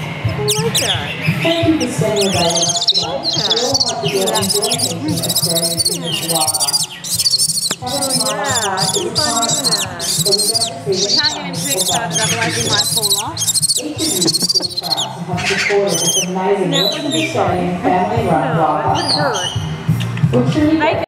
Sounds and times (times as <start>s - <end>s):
Owl: 0.3s - 17.4s, 19.0s - 19.7s.